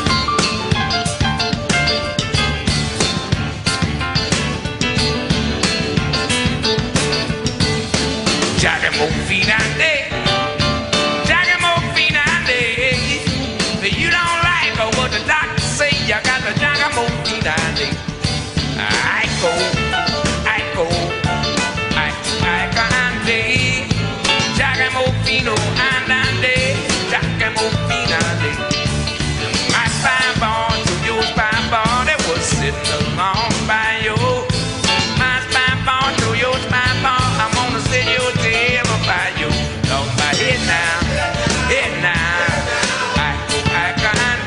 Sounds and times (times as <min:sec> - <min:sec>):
Blues: 0:00.0 - 0:44.4
Independent music: 0:00.0 - 0:44.4.